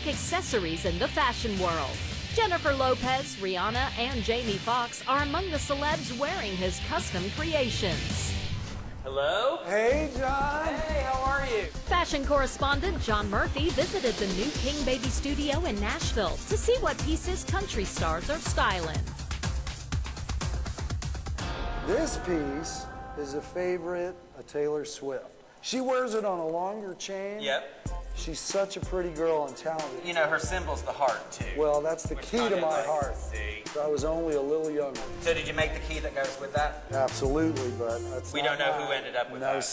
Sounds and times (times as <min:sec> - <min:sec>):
Music: 0:00.0 - 0:24.7, 0:27.4 - 0:39.7
Speech: 0:09.1 - 0:13.8, 0:28.2 - 0:39.7.